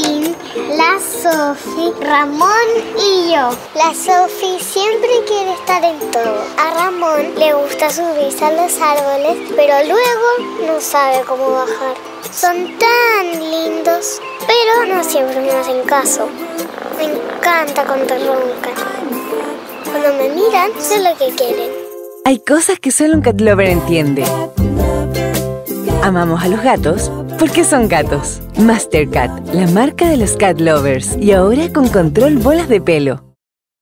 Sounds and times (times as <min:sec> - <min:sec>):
Music: 0:00.0 - 0:33.4
Speech: 0:22.3 - 0:24.3, 0:26.0 - 0:33.4.